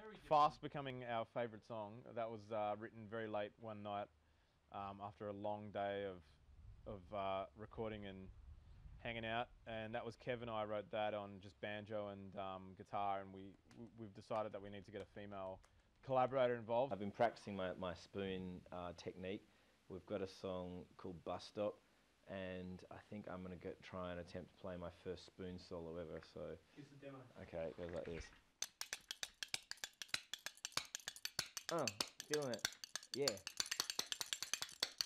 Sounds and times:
Speech: 0:00.0 - 0:04.1, 0:04.7 - 0:06.3, 0:06.9 - 0:08.3, 0:09.0 - 0:28.3, 0:31.7 - 0:32.6, 0:33.2 - 0:33.4.

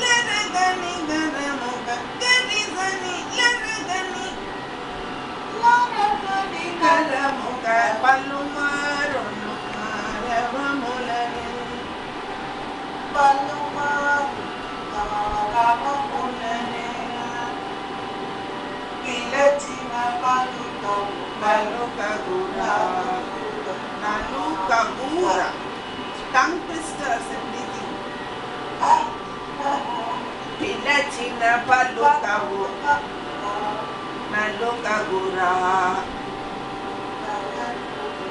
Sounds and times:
Female singing: 0:00.0 - 0:04.5, 0:05.5 - 0:11.9, 0:13.1 - 0:17.6, 0:19.0 - 0:25.6, 0:26.2 - 0:28.0, 0:28.8 - 0:36.2, 0:37.2 - 0:38.3
Speech: 0:26.3 - 0:28.0.

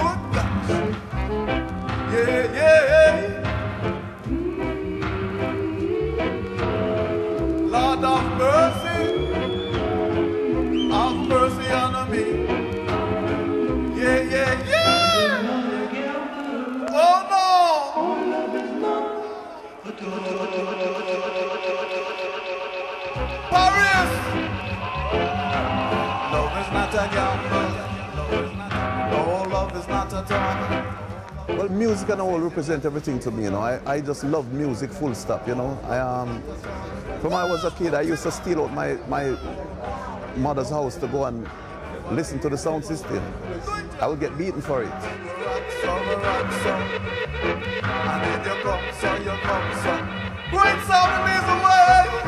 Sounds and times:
Music: 0:00.0 - 0:52.2.

